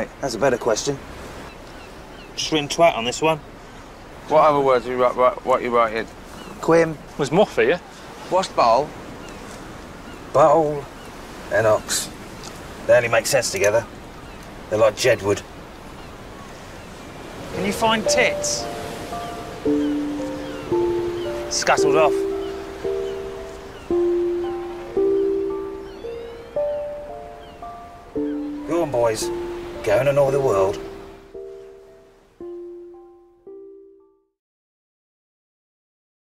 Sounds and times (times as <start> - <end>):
Music: 17.6 - 34.4.